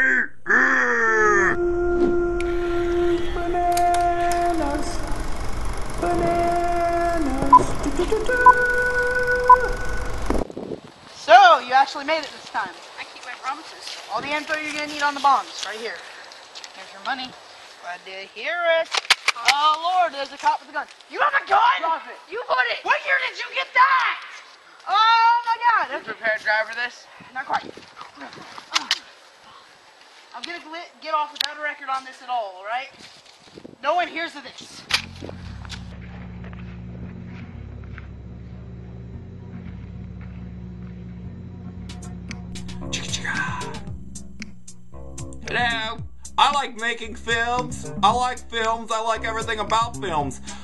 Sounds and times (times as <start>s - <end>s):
Speech: 33.8s - 34.8s, 45.4s - 50.6s
Music: 35.1s - 50.6s.